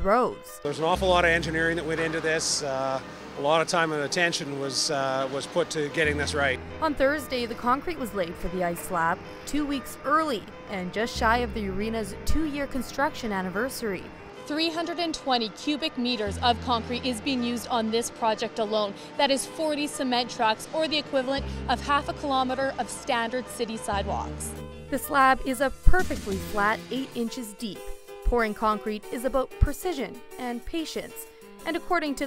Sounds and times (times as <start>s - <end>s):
Speech: 0.0s - 24.4s, 25.0s - 31.1s, 31.7s - 32.2s
Music: 0.0s - 32.2s.